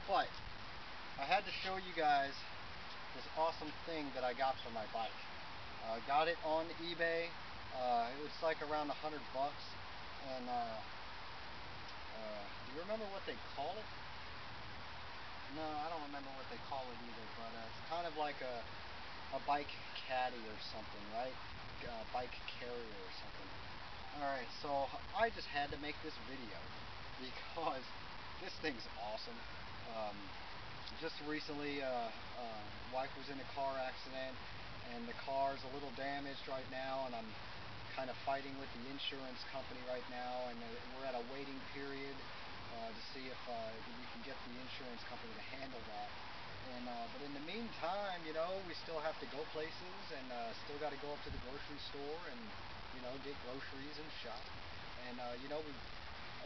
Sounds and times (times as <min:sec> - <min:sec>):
Speech: 0:00.0 - 0:00.4, 0:01.2 - 0:02.5, 0:03.2 - 0:05.2, 0:05.8 - 0:10.9, 0:12.1 - 0:13.9, 0:15.5 - 0:18.7, 0:19.3 - 0:23.5, 0:24.1 - 0:30.3, 0:30.9 - 0:55.8.